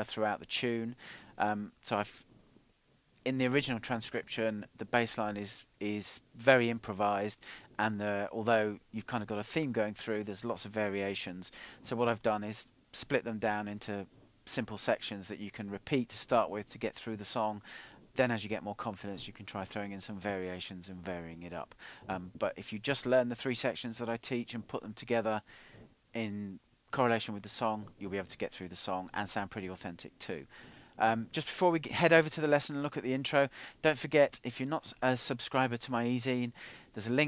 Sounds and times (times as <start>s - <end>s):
Speech: 0.0s - 2.2s, 3.2s - 17.6s, 18.2s - 25.4s, 26.2s - 37.2s.